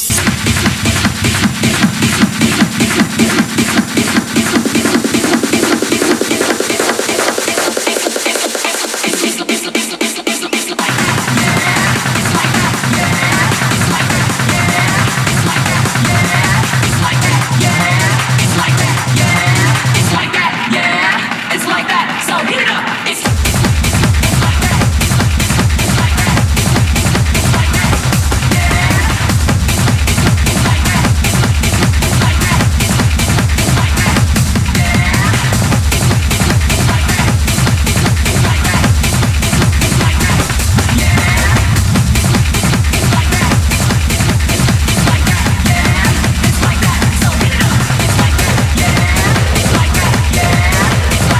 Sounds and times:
Techno: 0.0s - 51.3s.

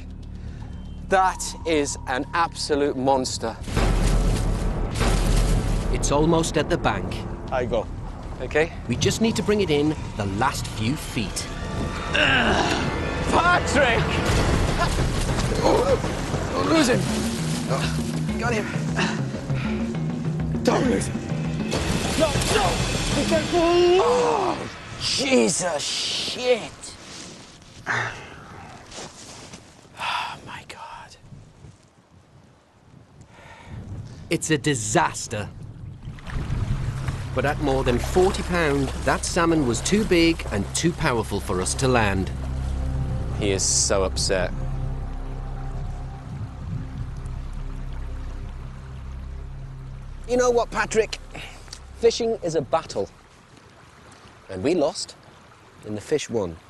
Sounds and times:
Music: 0.0s - 25.1s, 37.0s - 53.3s.

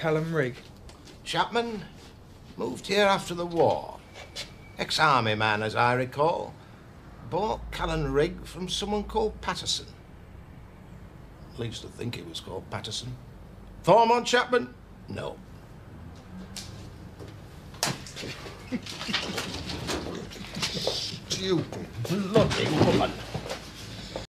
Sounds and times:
Speech: 0.0s - 0.6s, 1.2s - 2.0s, 2.6s - 4.0s, 4.8s - 6.6s, 7.3s - 10.0s, 11.6s - 13.2s, 13.8s - 15.4s, 20.8s - 23.3s.

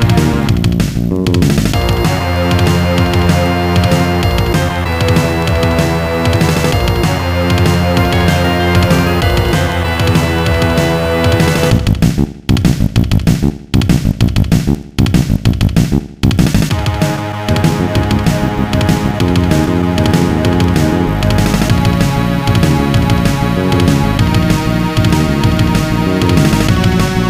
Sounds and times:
Music: 0.0s - 27.3s.

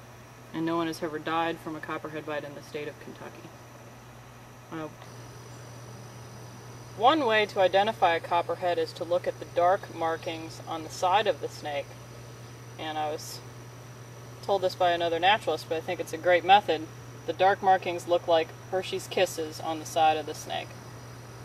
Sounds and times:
Speech: 0.5s - 3.5s, 4.7s - 5.0s, 7.0s - 11.9s, 12.8s - 13.4s, 14.4s - 20.7s.

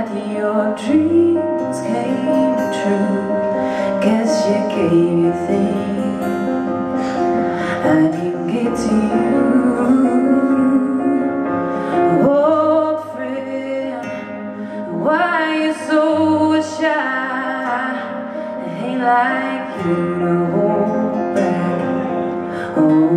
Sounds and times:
Music: 0.0s - 23.1s.

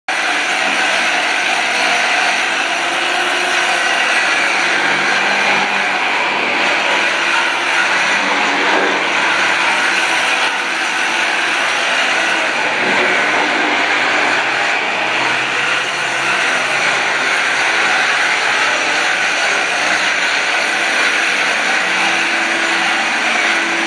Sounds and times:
Inside, small room: 0.1s - 23.8s.

